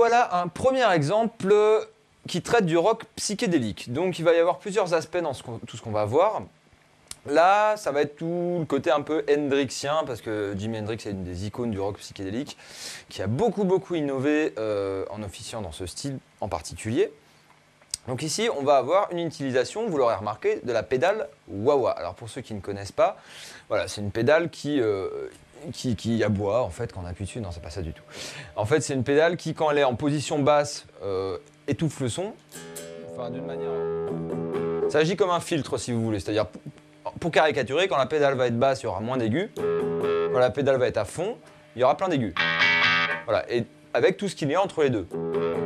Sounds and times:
Speech: 0.0 - 17.2, 18.0 - 32.4, 33.2 - 33.8, 34.9 - 39.6, 40.4 - 42.4, 43.3 - 45.1
Guitar: 32.4 - 35.7, 39.2 - 44.0, 44.7 - 45.6.

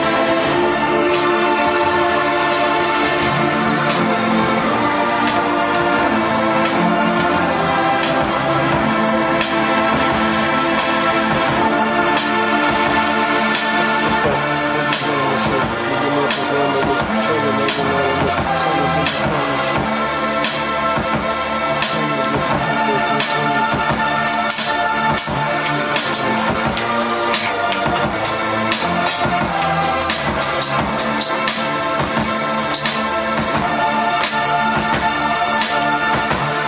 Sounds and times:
Electronica: 0.0 - 36.6.

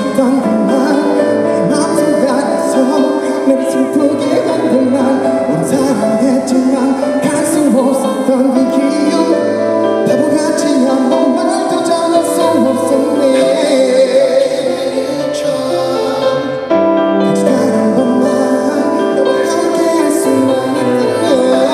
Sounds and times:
Music: 0.0 - 21.7.

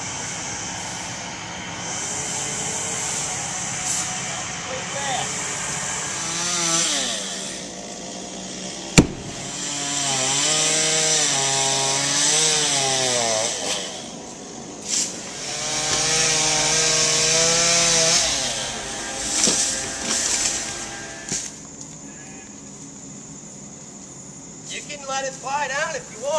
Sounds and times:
Chainsaw: 0.0 - 21.6.

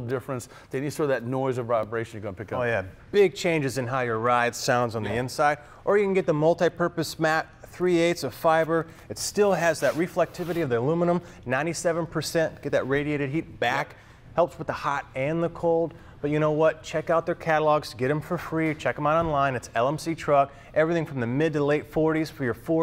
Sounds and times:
Speech: 0.0 - 22.8.

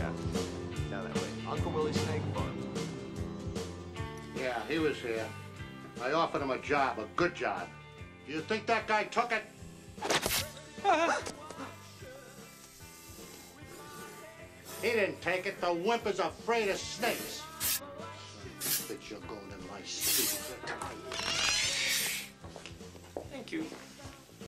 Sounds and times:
Music: 0.0 - 24.4.

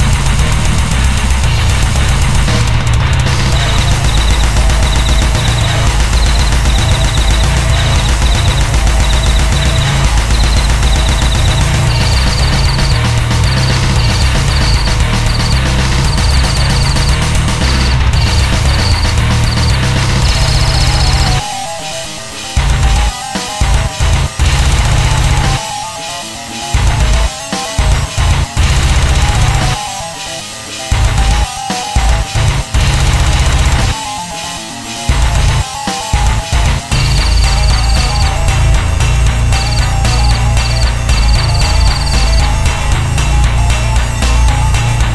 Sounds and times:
Music: 0.0 - 45.1.

